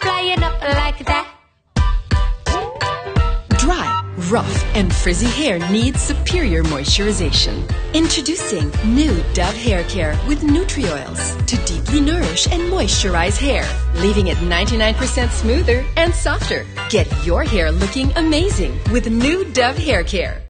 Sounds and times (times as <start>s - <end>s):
Music: 0.0s - 20.4s
Speech: 3.6s - 20.4s.